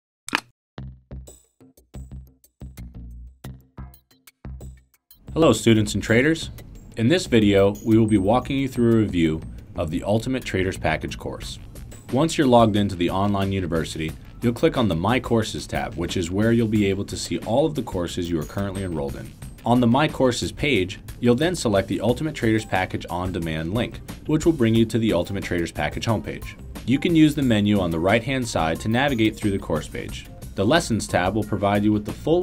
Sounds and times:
Music: 0.8s - 32.4s
Speech: 5.4s - 32.4s.

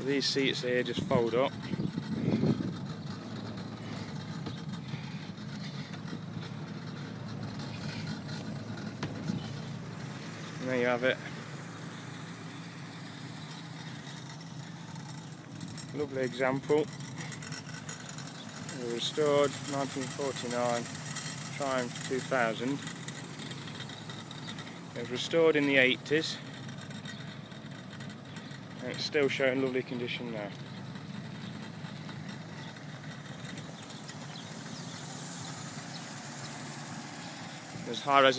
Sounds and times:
Vehicle: 0.0s - 38.3s.

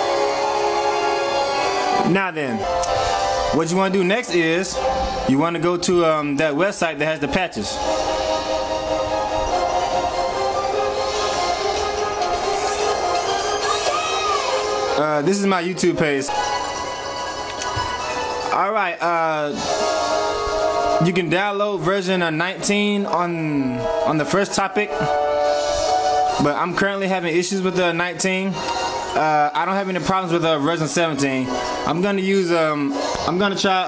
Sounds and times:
Music: 0.0s - 33.8s
Speech: 2.0s - 2.6s, 3.6s - 7.8s, 15.0s - 16.3s, 18.5s - 19.6s, 21.0s - 25.1s, 26.4s - 28.6s, 29.2s - 33.8s.

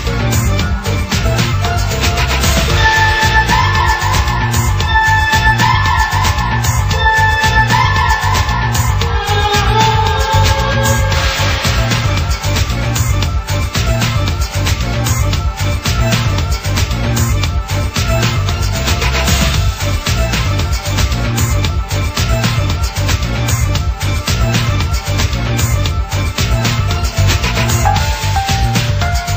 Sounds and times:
Video game music: 0.0s - 29.3s.

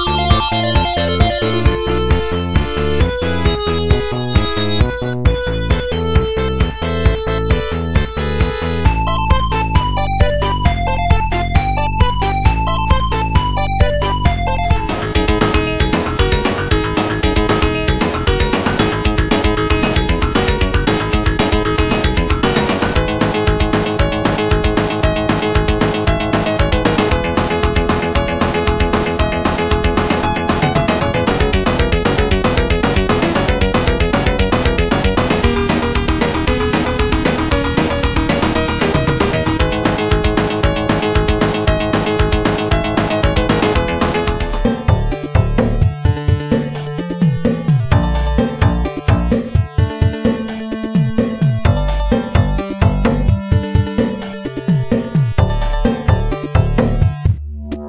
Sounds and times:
Music: 0.0s - 57.8s.

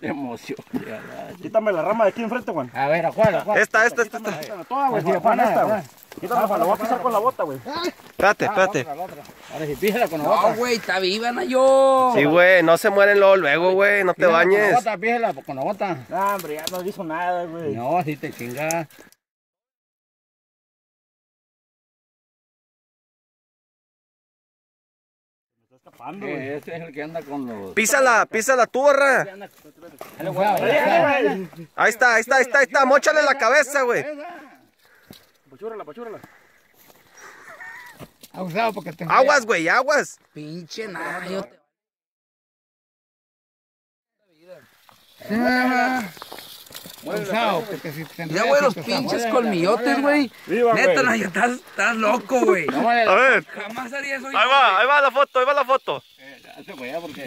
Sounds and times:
Outside, rural or natural: 0.0s - 19.3s, 25.6s - 41.8s, 44.1s - 57.2s.

